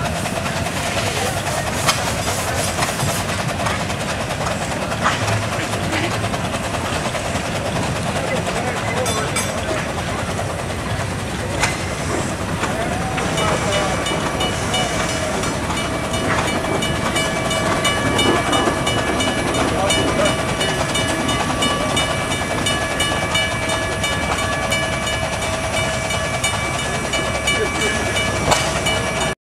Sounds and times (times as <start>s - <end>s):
Speech: 0.0s - 3.2s, 7.6s - 15.4s, 19.5s - 22.1s, 26.8s - 29.4s.